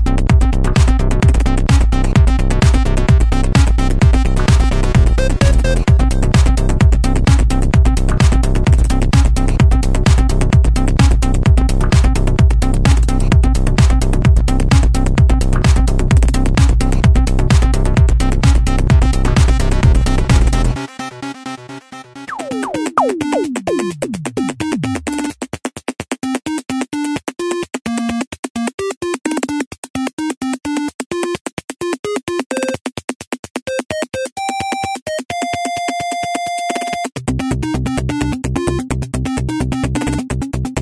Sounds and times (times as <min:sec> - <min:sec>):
Trance music: 0:00.0 - 0:25.3.